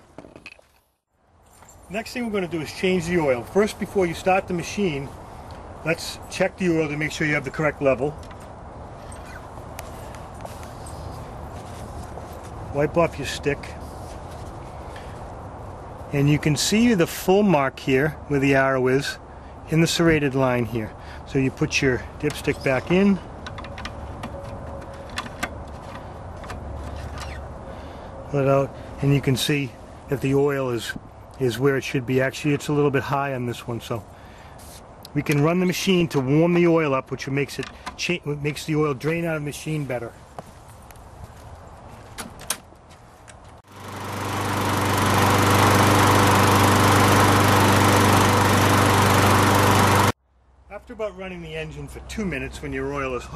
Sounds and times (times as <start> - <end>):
Speech: 1.9 - 5.1, 5.8 - 8.2, 12.7 - 13.8, 16.1 - 23.2, 28.3 - 34.0, 35.1 - 40.2, 50.7 - 53.3.